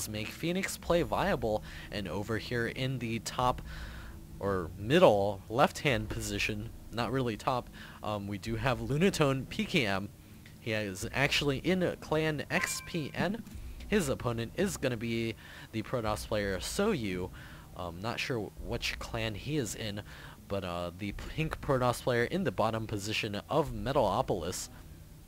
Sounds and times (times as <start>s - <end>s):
Speech: 0.0s - 3.6s, 4.4s - 24.7s.